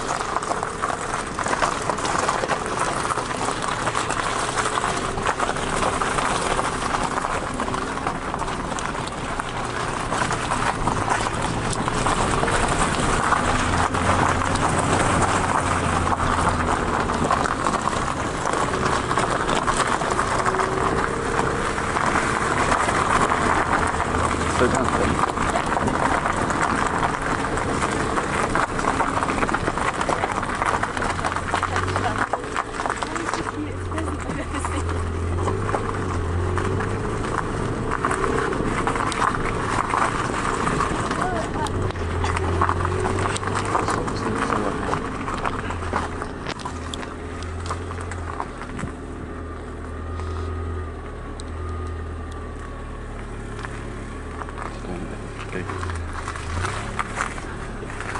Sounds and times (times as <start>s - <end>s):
Car: 0.0s - 58.1s
Speech: 24.5s - 25.7s, 31.6s - 32.4s, 33.0s - 34.9s, 41.1s - 41.8s, 43.8s - 45.0s, 54.7s - 55.8s.